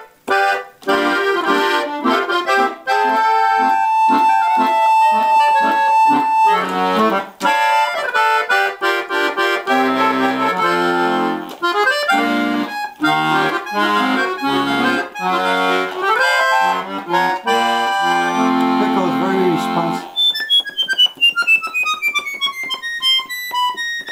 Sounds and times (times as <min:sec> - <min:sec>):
Accordion: 0:00.0 - 0:24.1
Speech: 0:18.1 - 0:20.1.